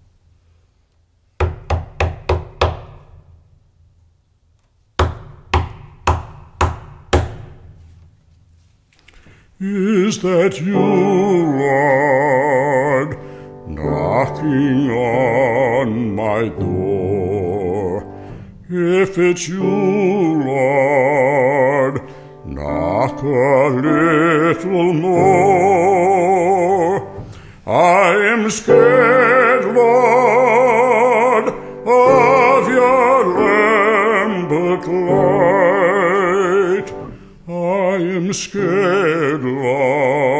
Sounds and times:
Music: 7.5 - 40.3.

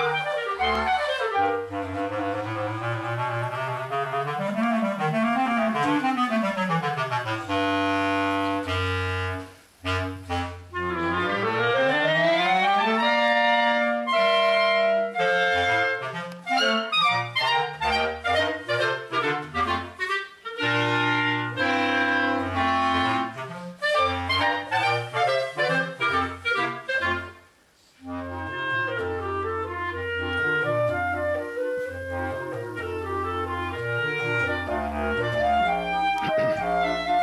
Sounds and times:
Clarinet: 0.0 - 37.2
Saxophone: 0.0 - 37.2.

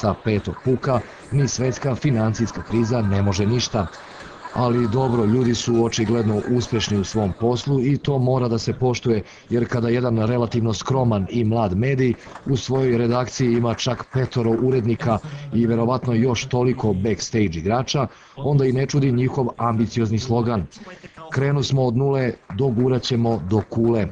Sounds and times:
Speech: 0.0 - 24.1.

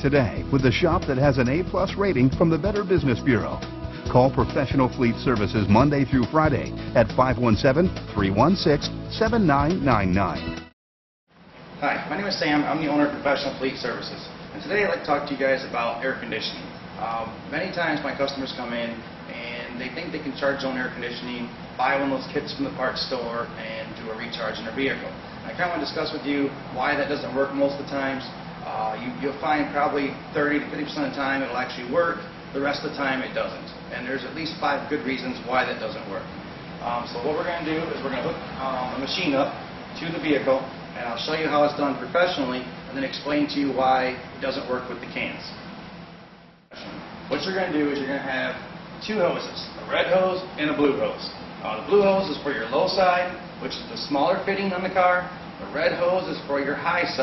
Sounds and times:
Speech: 0.0 - 10.4, 11.8 - 45.6, 46.7 - 57.2.

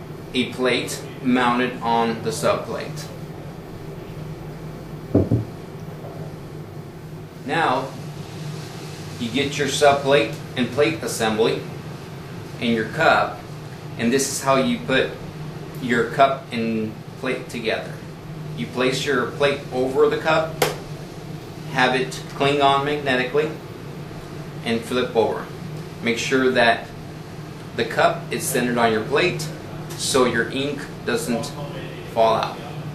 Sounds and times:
Speech: 0.3 - 3.2, 7.4 - 8.0, 9.2 - 11.7, 12.6 - 13.4, 14.0 - 15.2, 15.8 - 20.6, 21.7 - 23.6, 24.6 - 27.0, 27.8 - 32.9.

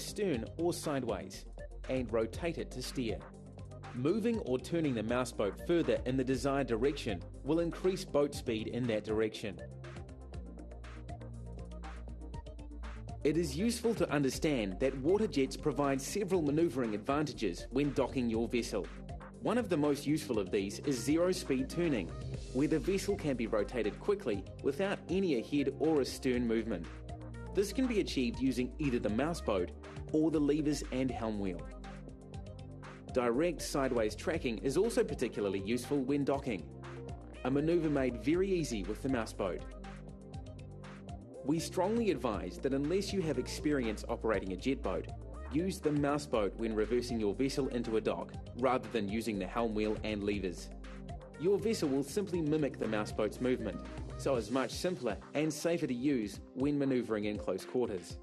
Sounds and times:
Speech: 0.0 - 3.3, 4.0 - 9.6, 13.3 - 26.9, 27.6 - 31.7, 33.1 - 36.7, 37.4 - 39.7, 41.4 - 50.7, 51.4 - 58.2
Music: 0.0 - 58.2.

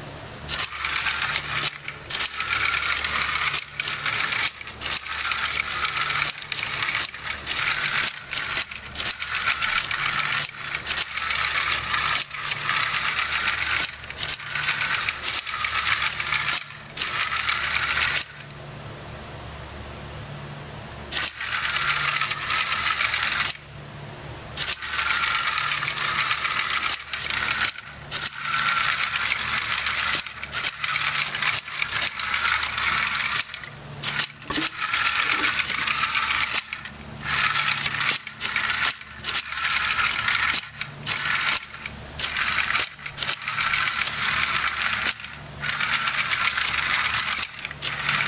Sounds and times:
Inside, small room: 0.0 - 48.2.

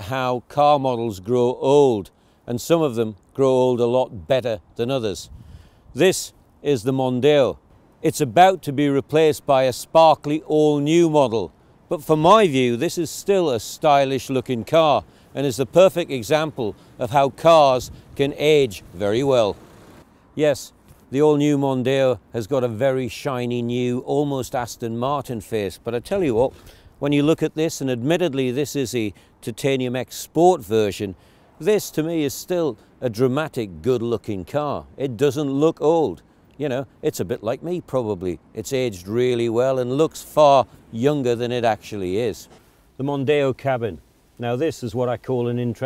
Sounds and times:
Speech: 0.0 - 5.3, 6.0 - 19.6, 20.4 - 45.8.

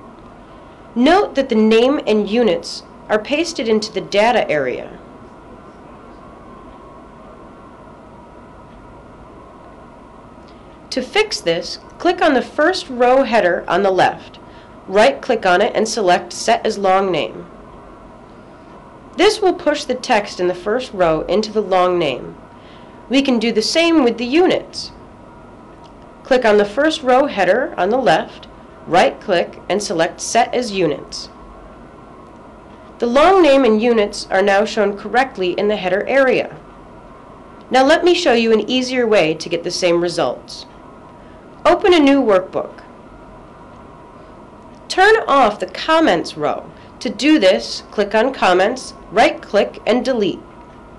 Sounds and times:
Speech: 1.0 - 5.0, 10.9 - 17.5, 19.2 - 22.4, 23.1 - 25.0, 26.3 - 31.4, 33.0 - 36.6, 37.7 - 40.7, 41.7 - 42.9, 44.9 - 50.5.

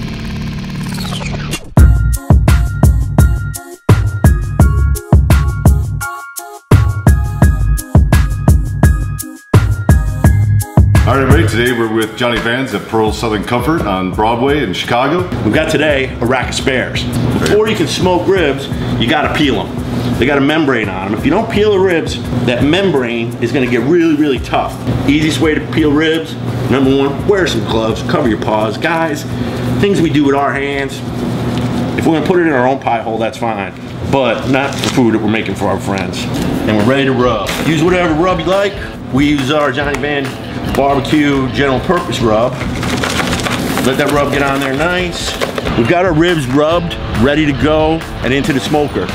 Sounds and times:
Speech: 11.0 - 31.0, 32.0 - 42.6, 43.8 - 49.1.

